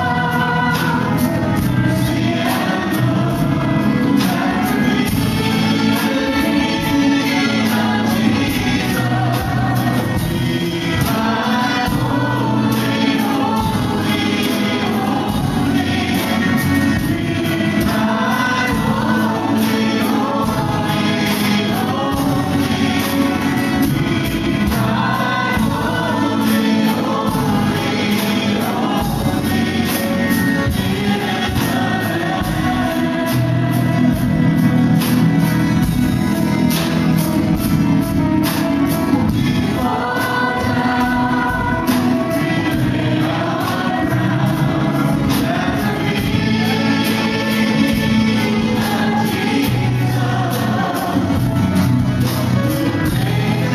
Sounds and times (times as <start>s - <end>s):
Independent music: 0.0s - 53.7s.